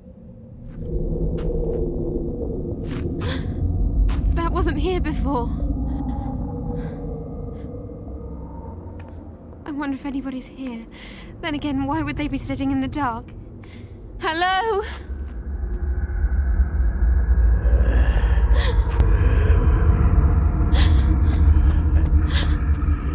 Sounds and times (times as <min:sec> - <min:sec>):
Speech: 0:04.4 - 0:05.6, 0:09.7 - 0:10.8.